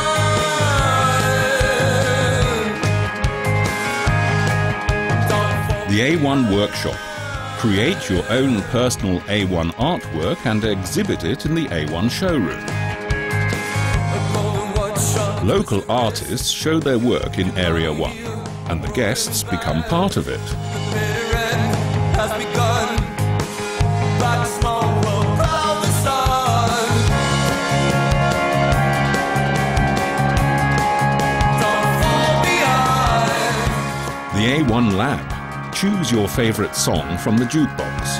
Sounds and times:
Music: 0:00.0 - 0:38.1
Speech: 0:05.7 - 0:12.7, 0:15.4 - 0:20.6, 0:34.3 - 0:38.1.

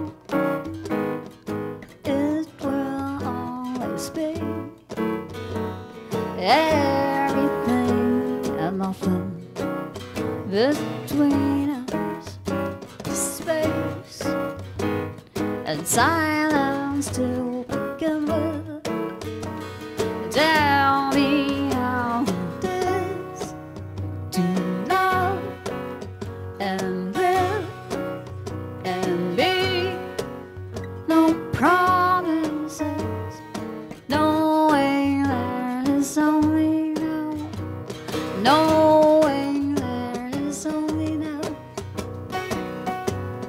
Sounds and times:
Music: 0:00.0 - 0:43.4.

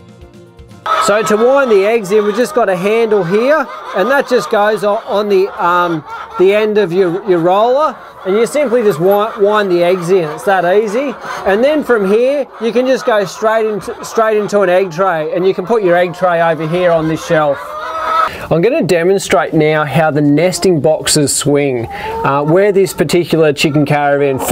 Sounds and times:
Cluck: 0:00.9 - 0:18.4, 0:20.0 - 0:24.5.

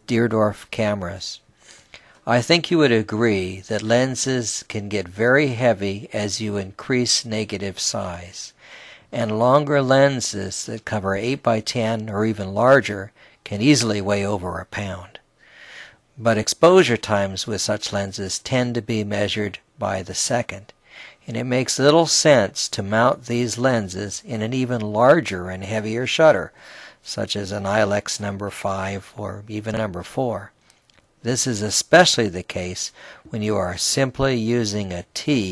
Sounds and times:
Speech: 0:00.0 - 0:01.4, 0:02.2 - 0:15.2, 0:16.2 - 0:30.6, 0:31.2 - 0:35.5.

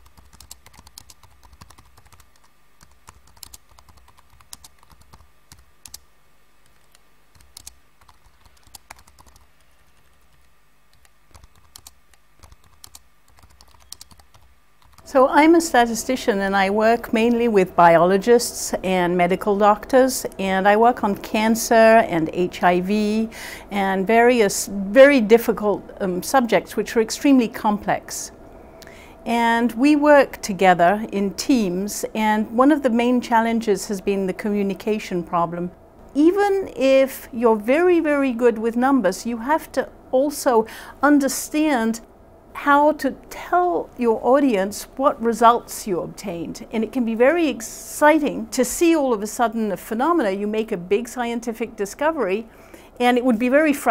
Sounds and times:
Speech: 0:15.1 - 0:28.3, 0:29.3 - 0:42.0, 0:42.6 - 0:53.9.

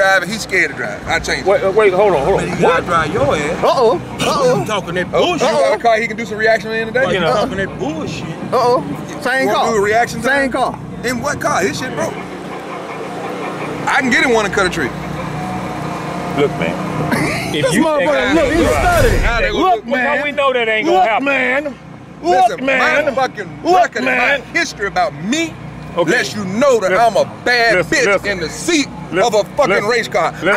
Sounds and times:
Speech: 0:17.6 - 0:30.5.

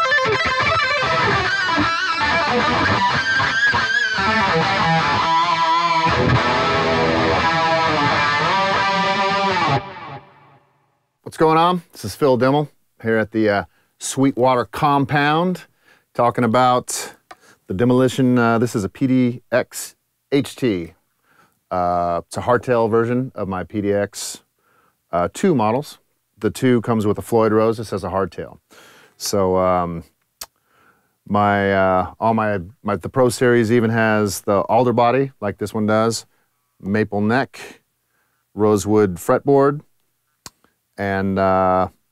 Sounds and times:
Speech: 0:11.2 - 0:21.0, 0:21.7 - 0:24.5, 0:25.1 - 0:28.6, 0:29.2 - 0:30.1, 0:31.3 - 0:37.8, 0:38.6 - 0:39.9, 0:41.0 - 0:42.0.

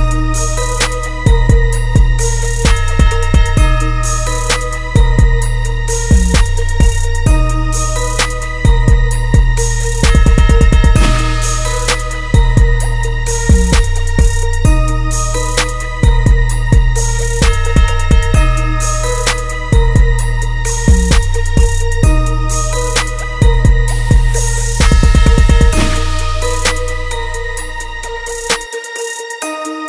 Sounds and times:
Music: 0:00.0 - 0:29.8.

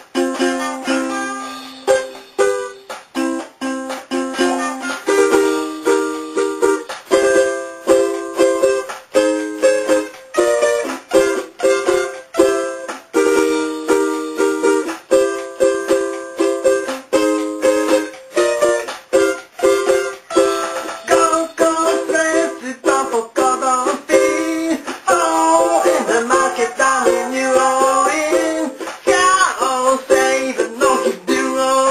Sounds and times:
Inside, small room: 0:00.0 - 0:31.9
Ukulele: 0:00.0 - 0:31.9.

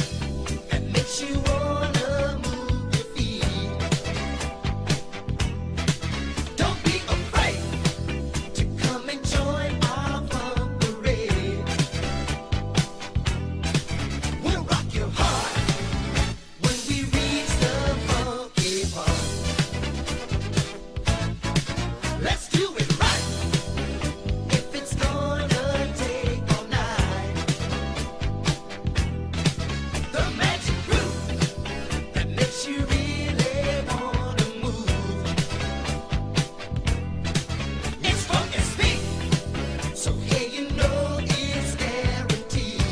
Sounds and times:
Pop music: 0:00.0 - 0:42.9.

